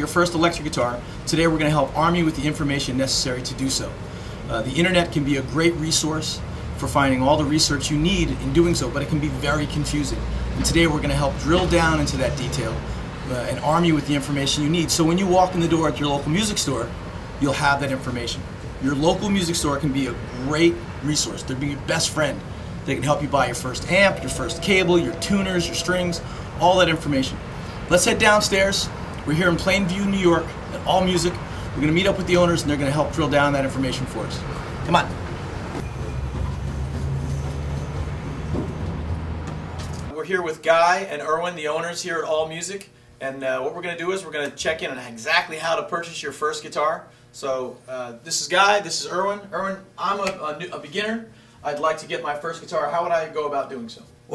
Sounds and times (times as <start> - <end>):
Speech: 0.0 - 35.2, 40.1 - 54.3.